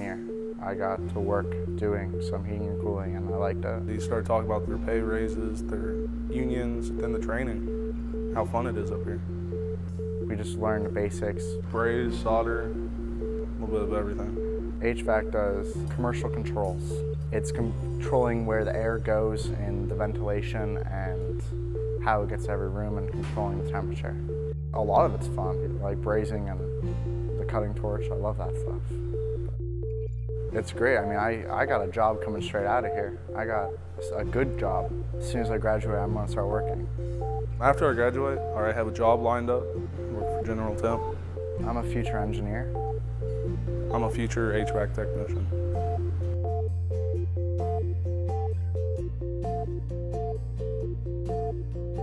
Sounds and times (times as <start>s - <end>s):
Speech: 0.0s - 7.6s, 8.4s - 9.2s, 10.3s - 12.8s, 13.6s - 21.3s, 22.0s - 24.2s, 24.8s - 26.6s, 27.4s - 28.8s, 30.6s - 36.8s, 37.6s - 42.7s, 43.9s - 45.4s
Music: 0.0s - 52.0s.